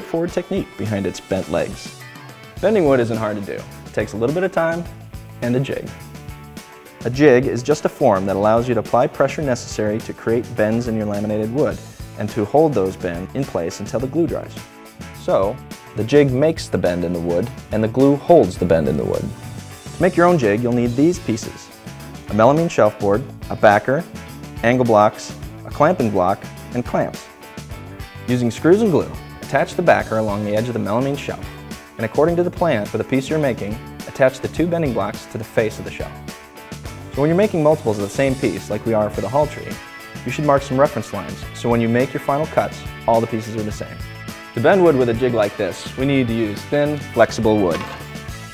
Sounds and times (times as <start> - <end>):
Speech: 0.0 - 2.0, 2.6 - 6.0, 7.0 - 14.6, 15.2 - 19.4, 20.0 - 21.7, 22.3 - 27.3, 28.3 - 36.2, 37.1 - 44.0, 44.6 - 48.0
Music: 0.0 - 48.5.